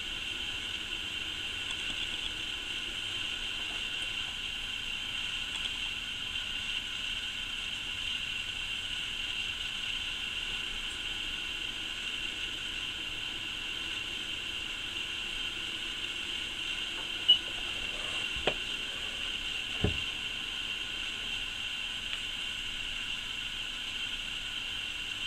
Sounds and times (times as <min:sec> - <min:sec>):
White noise: 0:00.0 - 0:25.2.